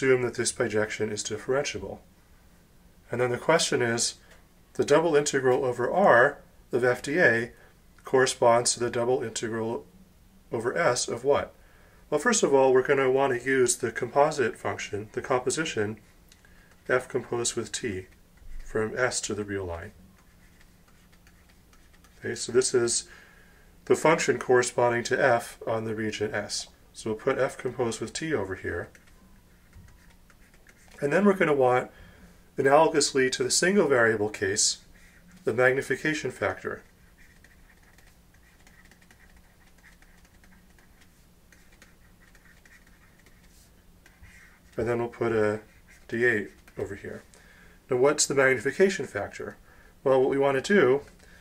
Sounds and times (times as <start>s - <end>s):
Speech: 0.0s - 2.0s, 3.1s - 4.2s, 4.8s - 9.9s, 10.5s - 16.0s, 16.9s - 20.0s, 22.2s - 23.1s, 23.8s - 29.0s, 31.0s - 31.9s, 32.6s - 36.9s, 44.8s - 47.3s, 47.9s - 51.1s
Inside, small room: 0.0s - 51.4s.